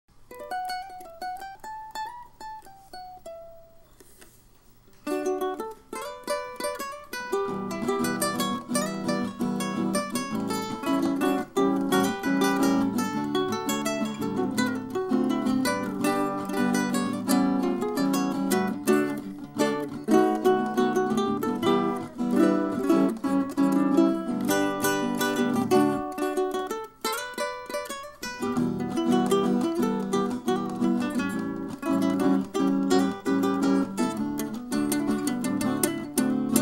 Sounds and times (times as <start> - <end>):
Ukulele: 0.1 - 36.6.